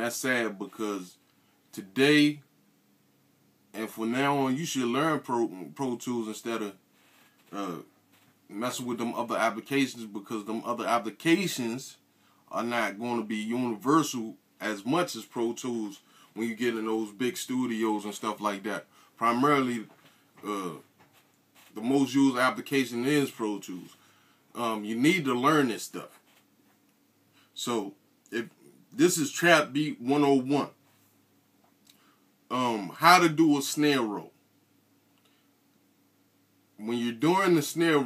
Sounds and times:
Speech: 0:00.0 - 0:02.5, 0:03.8 - 0:06.8, 0:07.5 - 0:07.9, 0:08.5 - 0:20.9, 0:21.7 - 0:24.0, 0:24.6 - 0:26.2, 0:27.6 - 0:30.8, 0:32.5 - 0:34.4, 0:36.8 - 0:38.0.

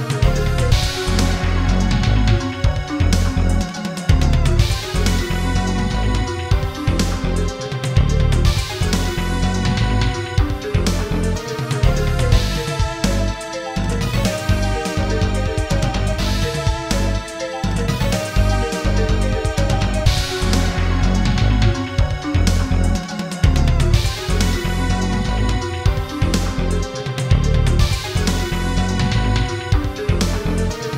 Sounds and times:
Music: 0:00.0 - 0:30.9.

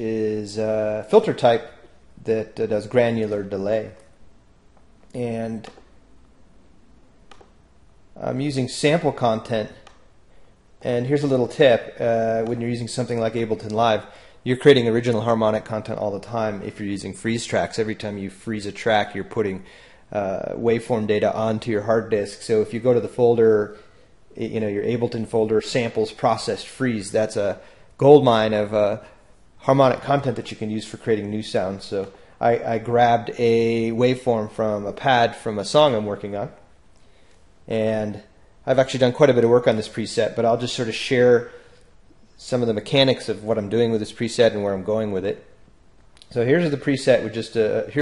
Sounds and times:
Speech: 0:00.0 - 0:04.1, 0:05.1 - 0:05.9, 0:08.2 - 0:09.9, 0:10.8 - 0:36.7, 0:37.7 - 0:41.6, 0:42.4 - 0:45.6, 0:46.2 - 0:48.0.

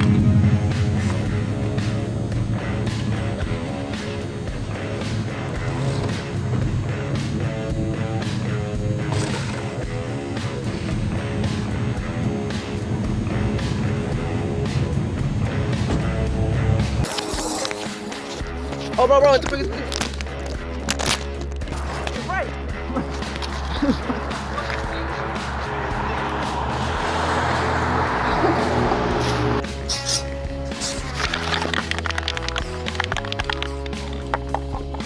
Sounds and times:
Music: 0:00.0 - 0:35.0
Outside, urban or manmade: 0:00.0 - 0:35.0
Speech: 0:18.9 - 0:19.9, 0:22.1 - 0:22.5.

